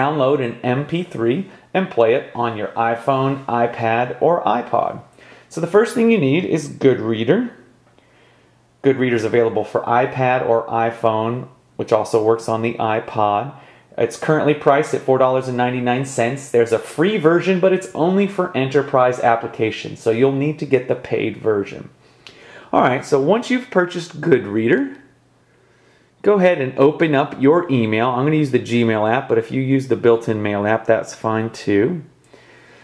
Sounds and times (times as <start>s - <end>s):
Speech: 0.0s - 7.7s, 8.8s - 22.0s, 22.6s - 25.2s, 26.2s - 32.2s.